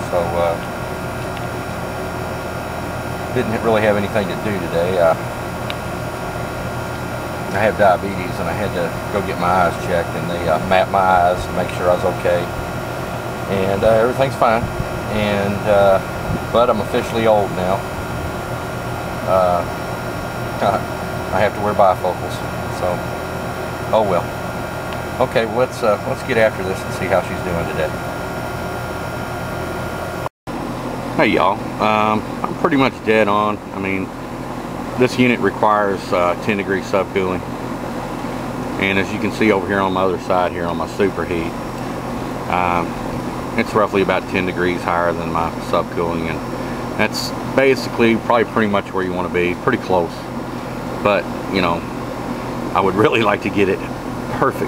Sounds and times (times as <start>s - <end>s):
Speech: 0.0s - 0.7s, 3.3s - 5.2s, 7.5s - 12.6s, 13.5s - 17.8s, 19.2s - 19.8s, 20.6s - 23.0s, 23.9s - 24.3s, 25.2s - 28.0s, 31.2s - 34.1s, 35.0s - 37.5s, 38.8s - 41.6s, 42.5s - 43.0s, 43.6s - 46.4s, 47.0s - 50.3s, 51.0s - 51.9s, 52.7s - 54.6s.